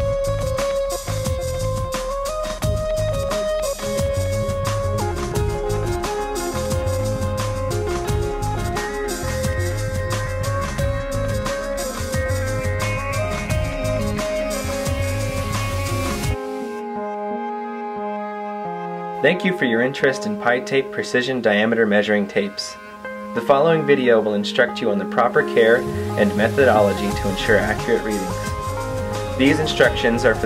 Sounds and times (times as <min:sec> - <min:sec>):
Music: 0:00.0 - 0:30.4
Speech: 0:19.2 - 0:22.8, 0:23.4 - 0:28.5, 0:29.4 - 0:30.4.